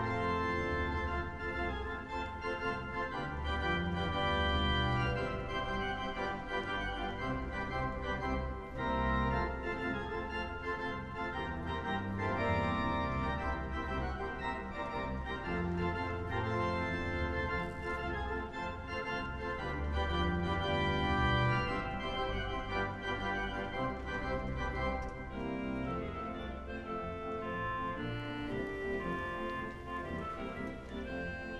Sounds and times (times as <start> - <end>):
Music: 0.0 - 31.5.